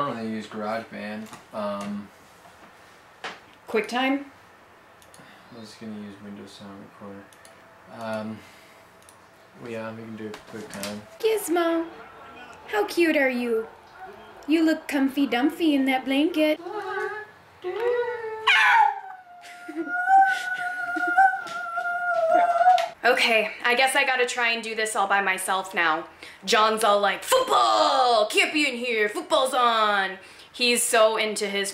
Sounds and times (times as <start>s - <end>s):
Inside, small room: 0.0s - 31.7s
Howl: 16.6s - 23.0s.